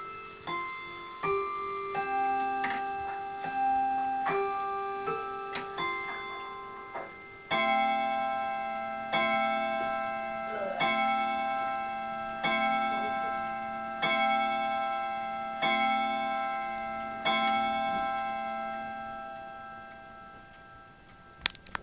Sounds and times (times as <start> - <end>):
Clock: 0.0 - 21.8
Inside, small room: 0.0 - 21.8.